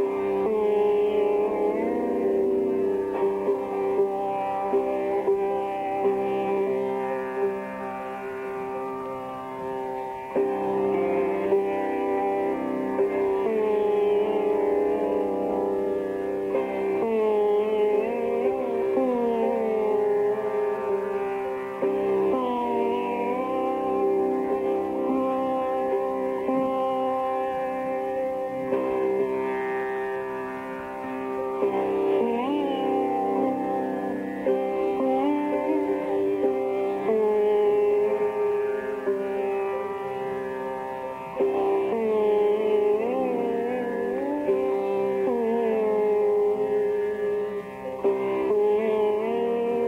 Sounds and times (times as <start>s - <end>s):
Music: 0.0s - 49.8s.